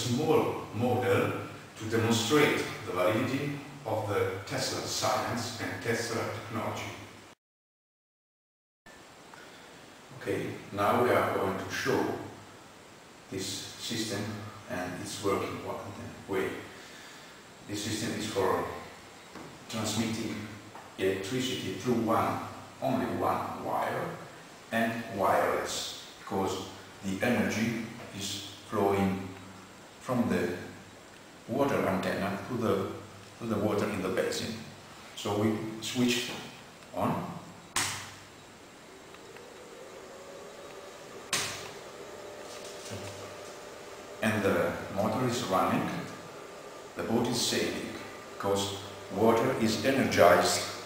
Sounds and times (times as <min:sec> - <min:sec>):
Speech: 0:00.0 - 0:07.1, 0:10.1 - 0:12.4, 0:13.3 - 0:16.7, 0:17.7 - 0:18.9, 0:19.7 - 0:29.4, 0:30.0 - 0:30.8, 0:31.5 - 0:37.5, 0:44.2 - 0:46.2, 0:47.0 - 0:50.8.